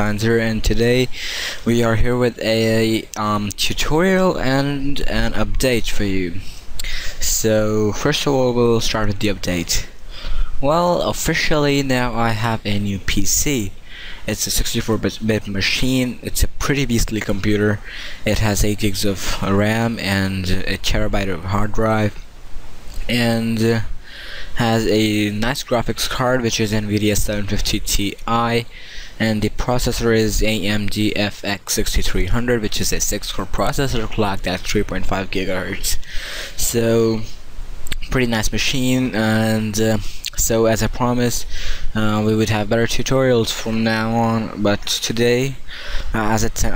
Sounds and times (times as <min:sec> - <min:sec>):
Speech: 0:00.0 - 0:10.0, 0:10.6 - 0:22.2, 0:23.0 - 0:23.9, 0:24.6 - 0:46.7.